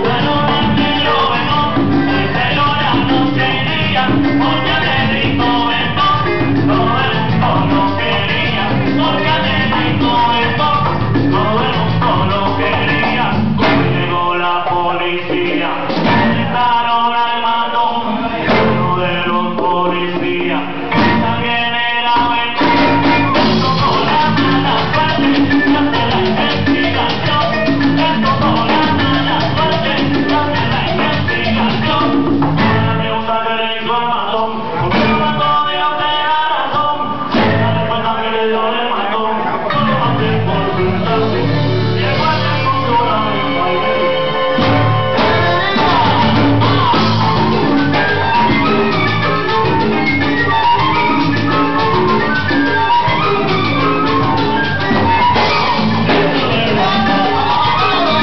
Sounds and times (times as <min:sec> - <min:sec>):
Salsa music: 0:00.0 - 0:58.2.